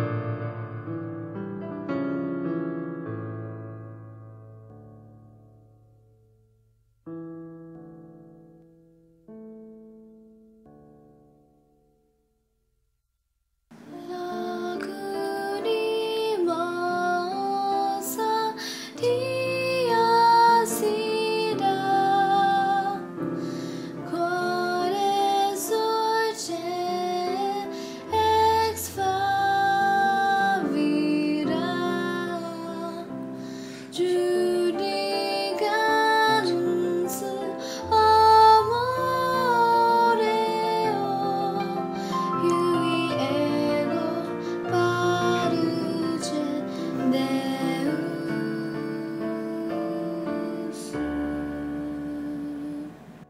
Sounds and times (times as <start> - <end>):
Lullaby: 13.7 - 53.2.